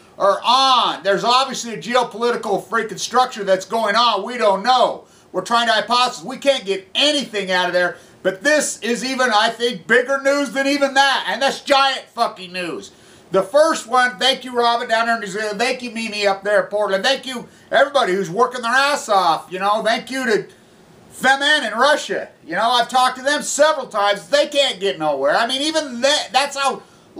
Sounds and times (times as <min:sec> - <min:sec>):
Speech: 0:00.2 - 0:20.6, 0:21.2 - 0:26.8.